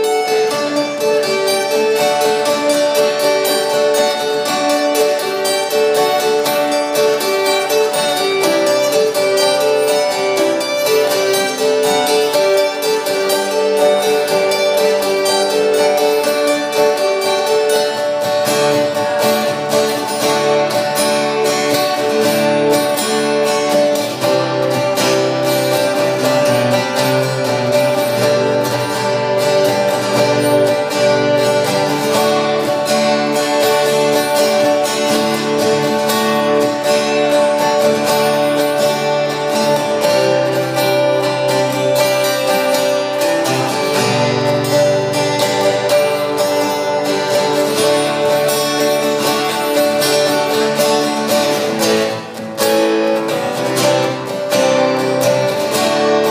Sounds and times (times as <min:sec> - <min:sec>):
Acoustic guitar: 0:00.0 - 0:56.3
Strum: 0:00.0 - 0:56.3.